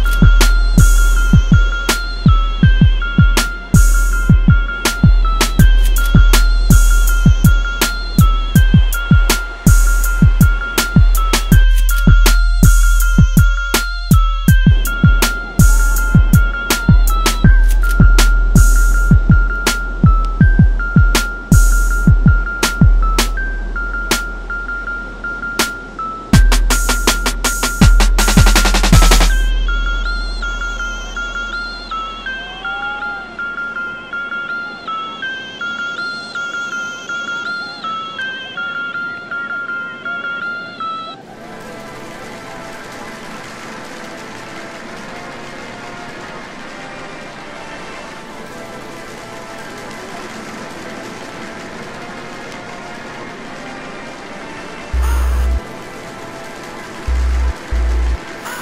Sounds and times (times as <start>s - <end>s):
Music: 0.0s - 58.6s
Outside, rural or natural: 0.0s - 58.6s
Waves, surf: 29.3s - 55.0s.